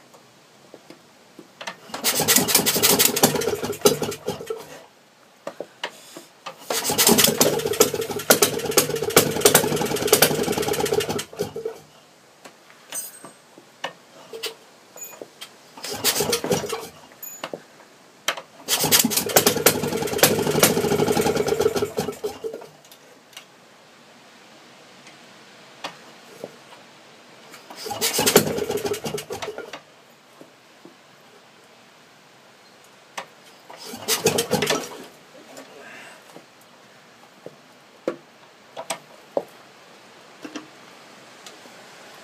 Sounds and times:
Engine starting: 1.9 - 4.8, 6.6 - 11.8, 15.8 - 17.0, 18.6 - 22.7, 27.7 - 29.7, 33.8 - 35.1.

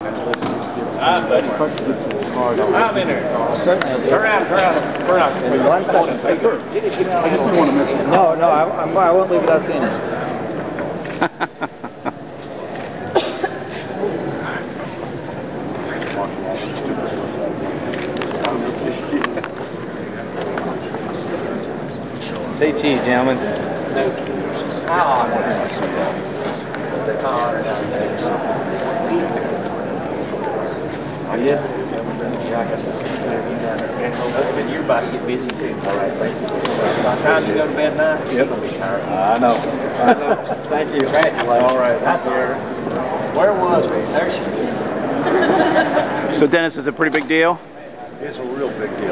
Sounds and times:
Speech: 15.8 - 44.9, 46.3 - 49.1.

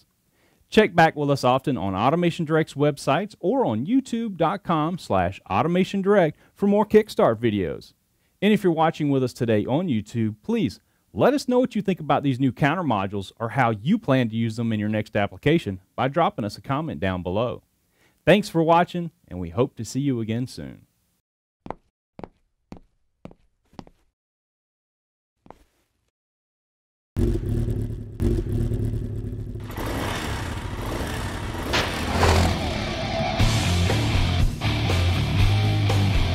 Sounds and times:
Speech: 0.7 - 17.6, 18.2 - 20.9.

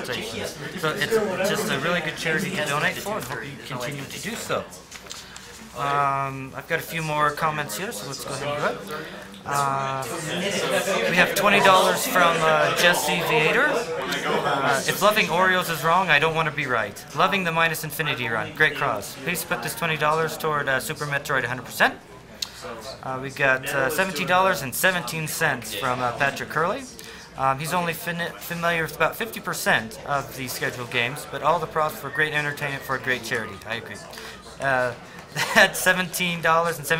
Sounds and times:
Speech: 0.0 - 4.8, 5.7 - 36.9.

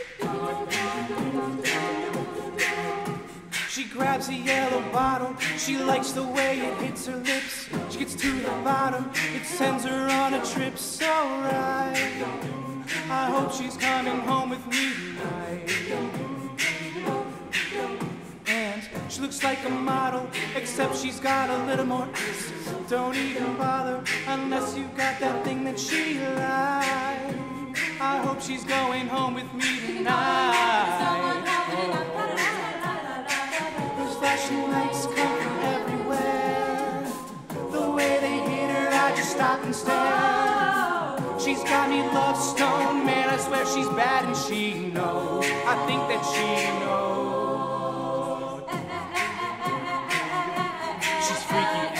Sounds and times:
Music: 0.0 - 52.0.

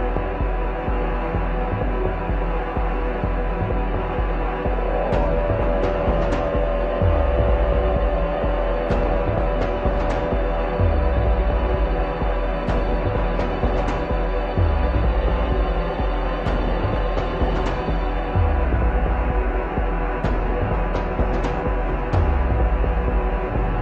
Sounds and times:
Music: 0.0 - 23.8.

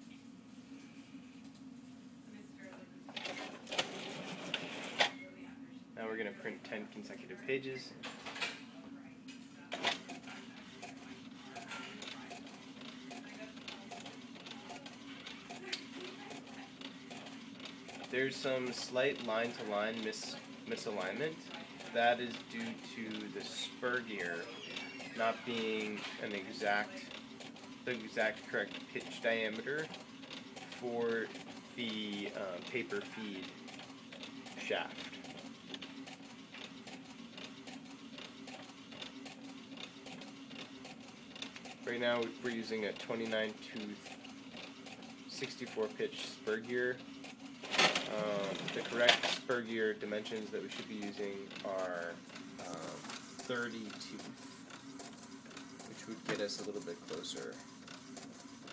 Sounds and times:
Printer: 3.1 - 5.3, 9.3 - 58.7
Speech: 5.5 - 8.0, 18.1 - 24.6, 25.2 - 27.2, 27.8 - 29.9, 30.8 - 33.5, 34.6 - 35.0, 41.8 - 44.1, 45.3 - 47.0, 48.1 - 54.3, 55.9 - 57.6.

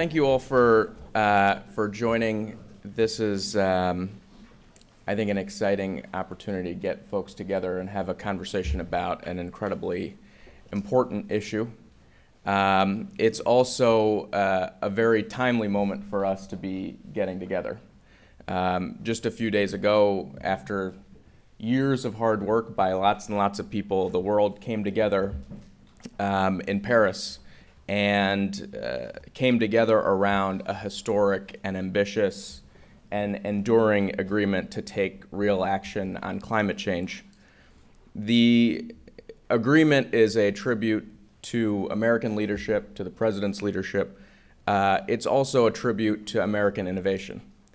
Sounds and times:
Speech: 0.0 - 4.2, 5.0 - 17.9, 18.5 - 37.3, 38.1 - 47.5.

